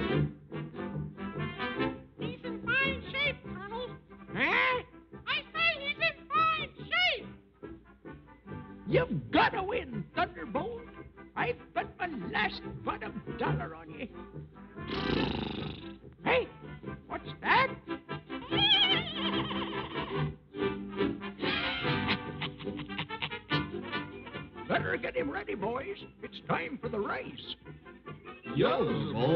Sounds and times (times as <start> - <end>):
Music: 0.0 - 29.3
Speech: 2.2 - 7.3, 8.9 - 14.2, 16.2 - 17.8, 24.7 - 27.6, 28.6 - 29.3.